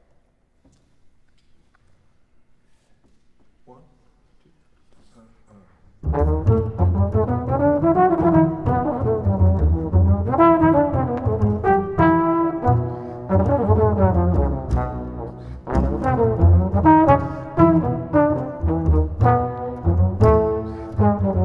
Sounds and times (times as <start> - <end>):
Trombone: 6.0 - 21.4.